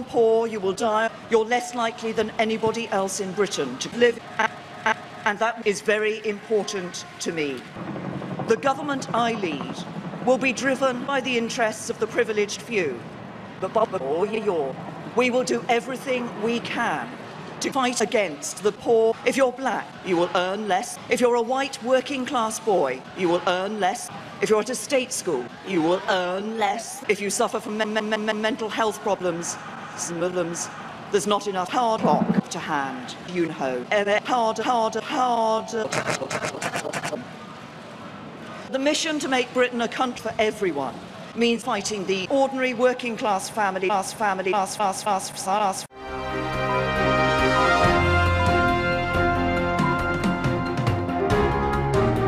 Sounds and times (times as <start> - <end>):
Female speech, woman speaking: 0.0 - 7.7, 8.5 - 13.0, 13.6 - 36.5, 38.7 - 45.9
Narration, monologue: 0.0 - 37.3, 38.5 - 45.9.